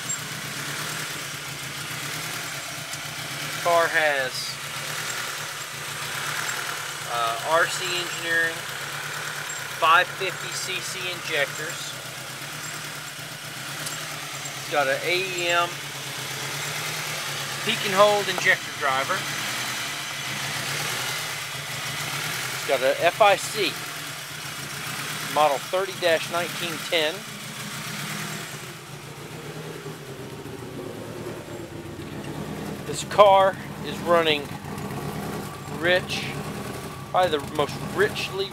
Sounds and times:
Speech: 3.6s - 4.6s, 7.1s - 8.6s, 9.8s - 11.9s, 14.6s - 15.8s, 17.7s - 19.2s, 22.7s - 23.8s, 25.4s - 27.3s, 32.9s - 34.5s, 35.8s - 36.4s, 37.2s - 38.5s.

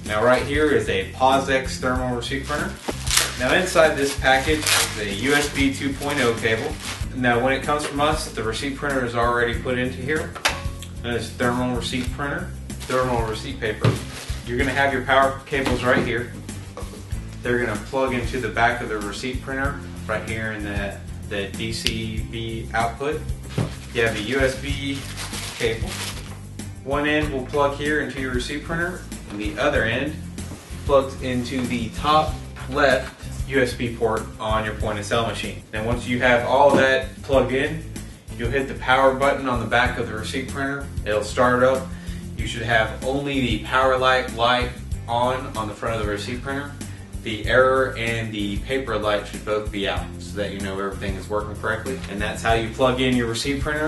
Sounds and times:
Speech: 0.0s - 2.8s, 3.4s - 10.4s, 11.0s - 16.4s, 17.4s - 23.2s, 24.0s - 26.0s, 26.8s - 30.2s, 30.9s - 53.8s
Music: 0.0s - 53.8s.

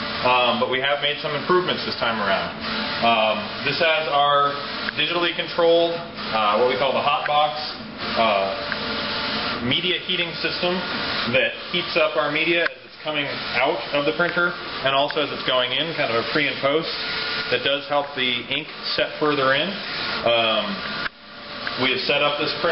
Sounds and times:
Printer: 0.0s - 22.7s
Speech: 0.2s - 8.7s, 9.6s - 20.8s, 21.8s - 22.7s.

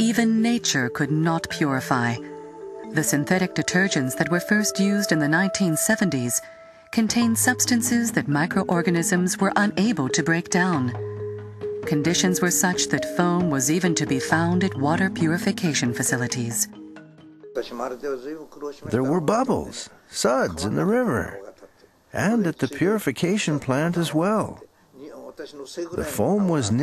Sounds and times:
Music: 0.0s - 19.8s
Speech: 17.6s - 21.6s, 22.2s - 26.8s.

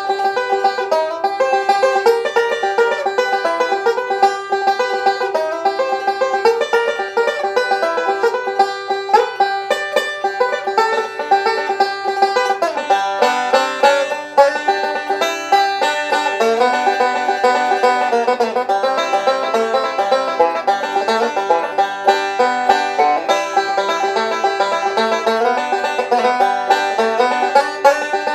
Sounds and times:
Banjo: 0.0s - 28.3s
Bluegrass: 0.0s - 28.3s.

